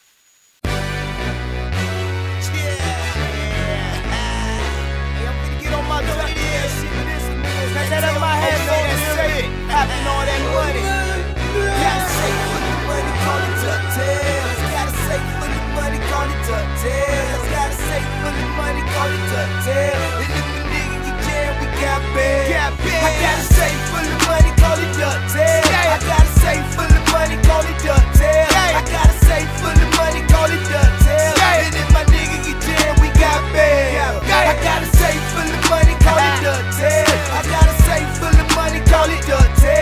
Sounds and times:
Exciting music: 0:00.7 - 0:39.8.

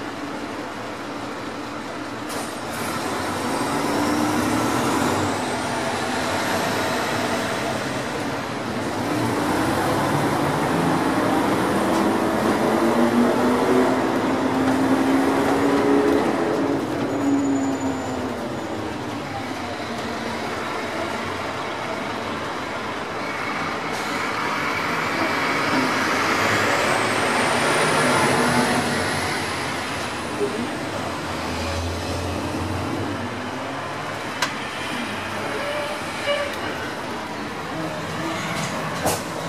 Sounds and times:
Vehicle: 0:00.0 - 0:39.4.

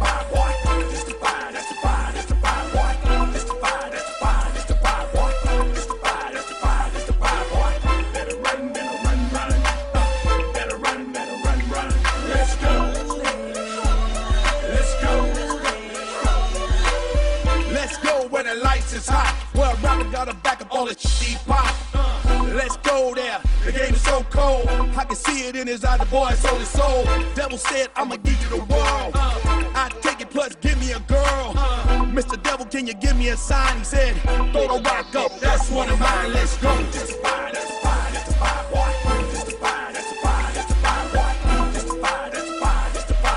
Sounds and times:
Music: 0:00.0 - 0:43.3.

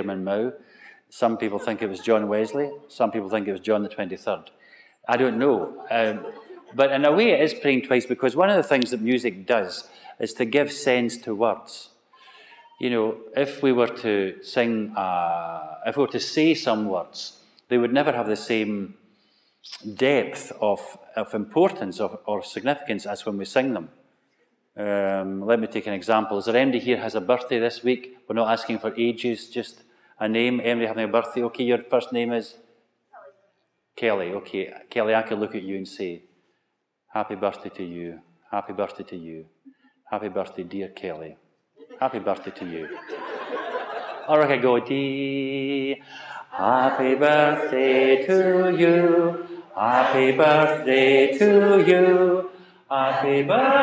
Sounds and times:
Speech: 0:00.0 - 0:04.5, 0:05.1 - 0:18.9, 0:19.7 - 0:23.9, 0:24.8 - 0:32.6, 0:34.0 - 0:36.2, 0:37.2 - 0:39.4, 0:40.1 - 0:43.0, 0:44.3 - 0:46.0.

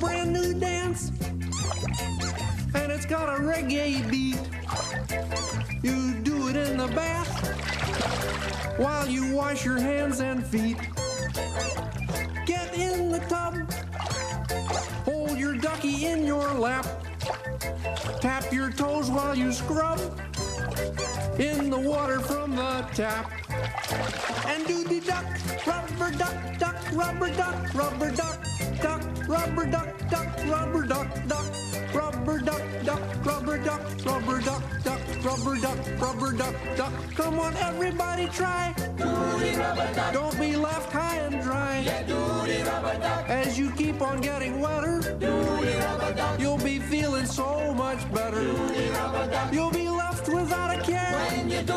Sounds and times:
Music: 0:00.0 - 0:51.7
Speech: 0:15.1 - 0:16.8, 0:21.4 - 0:23.2, 0:24.5 - 0:25.3.

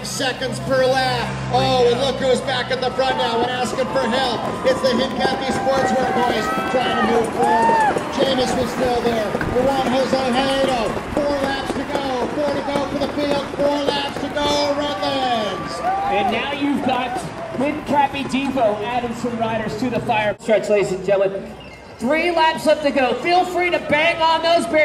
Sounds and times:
Speech: 0:00.0 - 0:07.4, 0:08.2 - 0:24.8
Bicycle: 0:03.1 - 0:16.4.

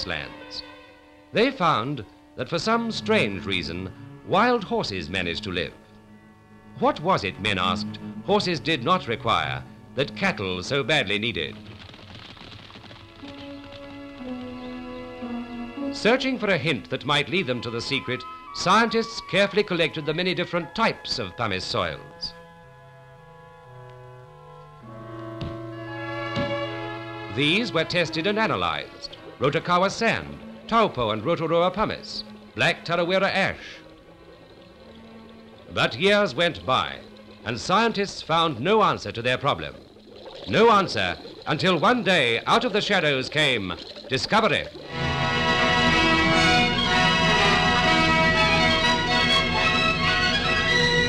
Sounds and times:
Speech: 0:00.0 - 0:00.6, 0:01.4 - 0:05.8, 0:06.8 - 0:11.6, 0:16.0 - 0:22.4, 0:27.3 - 0:33.8, 0:35.7 - 0:39.8, 0:40.5 - 0:44.7
Music: 0:00.0 - 0:51.0.

